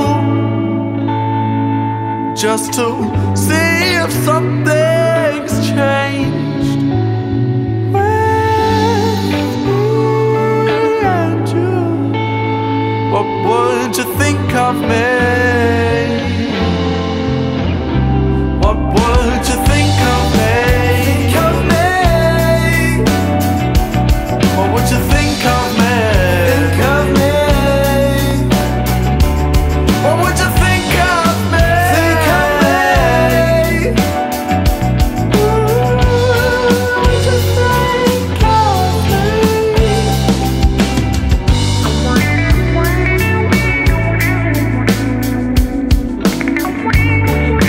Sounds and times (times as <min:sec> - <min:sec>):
Blues: 0:00.0 - 0:47.6.